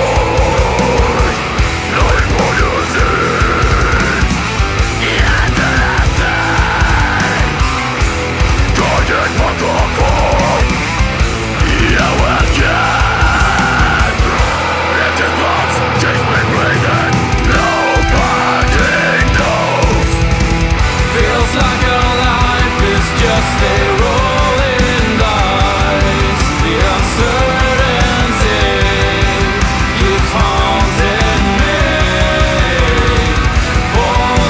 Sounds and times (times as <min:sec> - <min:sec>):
Music: 0:00.0 - 0:34.4.